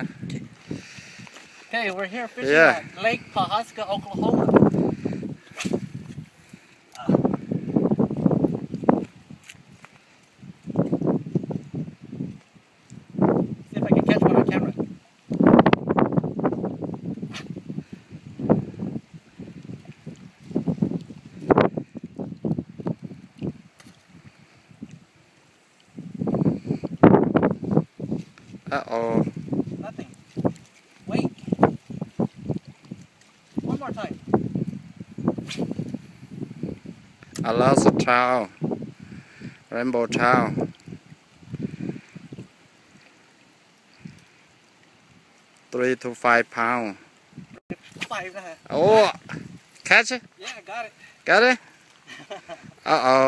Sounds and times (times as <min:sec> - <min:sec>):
Outside, rural or natural: 0:00.0 - 0:53.2.